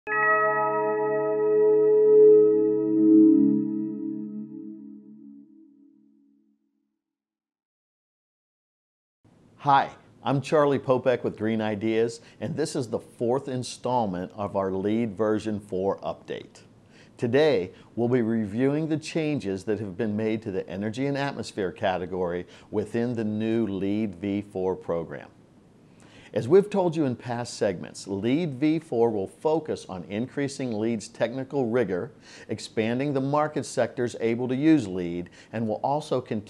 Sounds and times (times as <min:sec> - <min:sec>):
Music: 0:00.1 - 0:06.2
Speech: 0:09.6 - 0:25.4, 0:26.3 - 0:36.4.